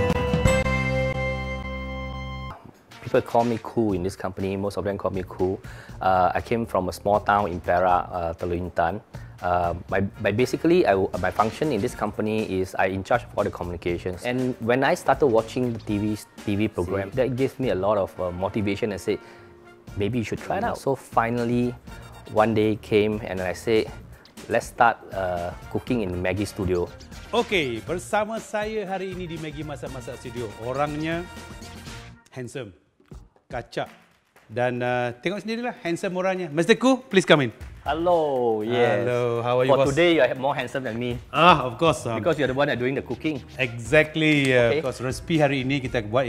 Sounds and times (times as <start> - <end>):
Music: 0.0 - 46.2
Speech: 2.6 - 19.2, 20.0 - 31.3, 34.5 - 46.2.